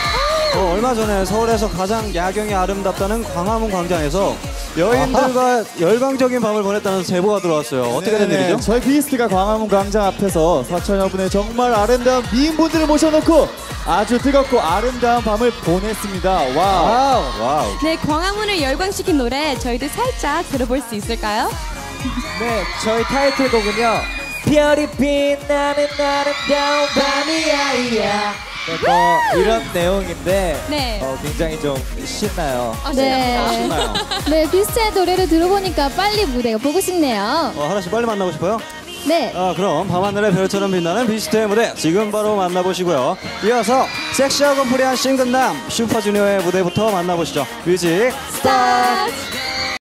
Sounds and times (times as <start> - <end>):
Music of Asia: 0.0 - 49.8
Pop music: 0.0 - 49.8
Singing: 19.0 - 49.8.